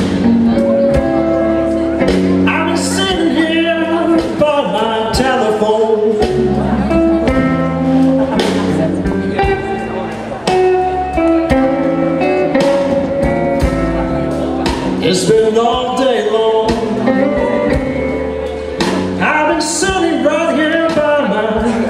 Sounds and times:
Blues: 0:00.0 - 0:21.8.

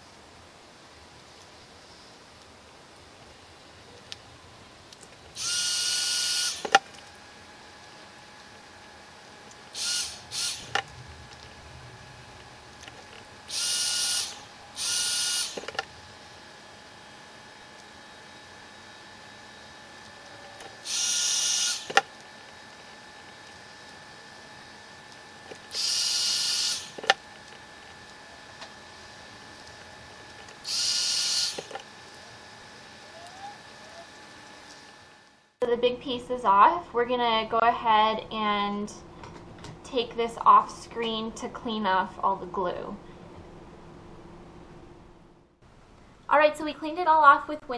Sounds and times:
Power tool: 0:05.3 - 0:35.5.

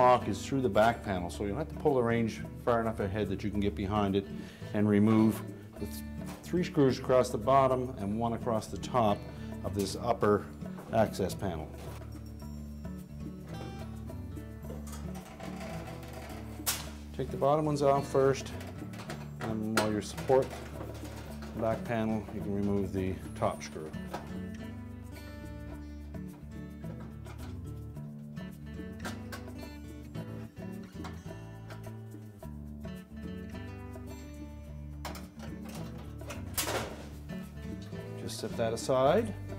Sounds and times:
Speech: 0:00.0 - 0:11.8, 0:17.2 - 0:18.6, 0:19.4 - 0:20.6, 0:21.5 - 0:24.0, 0:37.8 - 0:39.4
Music: 0:00.0 - 0:39.5.

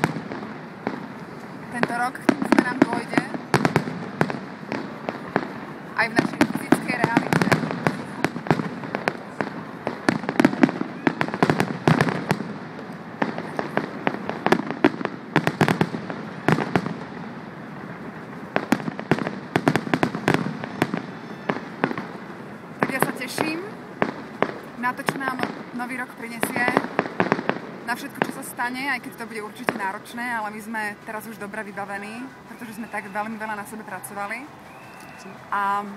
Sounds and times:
Fireworks: 0:00.0 - 0:35.8.

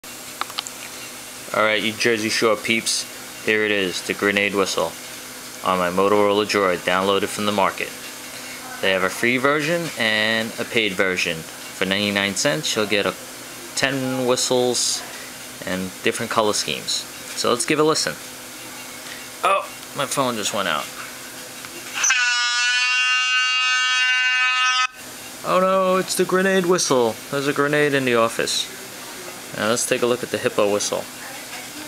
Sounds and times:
Speech: 0:01.5 - 0:05.0, 0:05.6 - 0:08.0, 0:08.6 - 0:18.8, 0:19.4 - 0:20.9, 0:25.4 - 0:31.8.

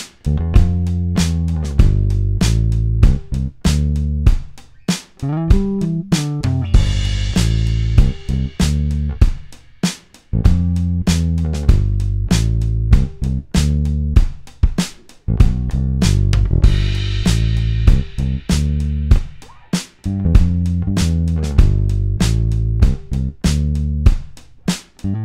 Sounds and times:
Music: 0:00.0 - 0:25.2.

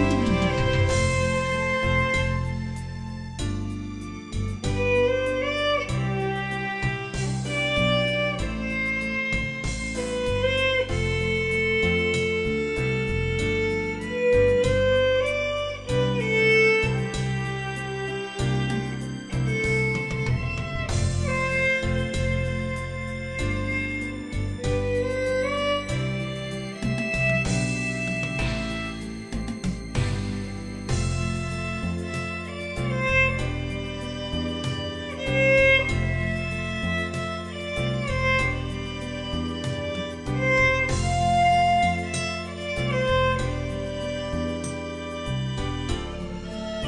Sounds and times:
Violin, fiddle: 0:00.0 - 0:46.8.

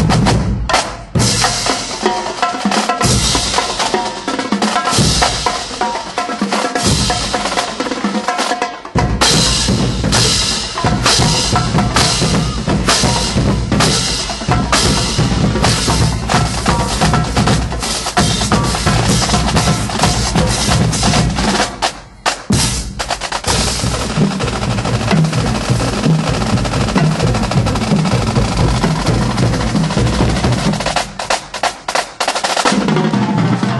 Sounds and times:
Percussion: 0:00.0 - 0:33.7.

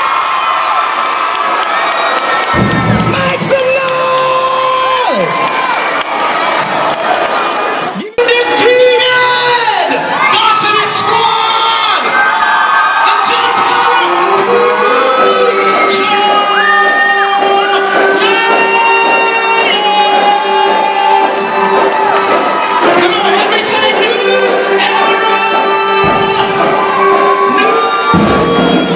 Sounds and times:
Cheering: 0:00.0 - 0:28.9
Crowd: 0:00.0 - 0:28.9.

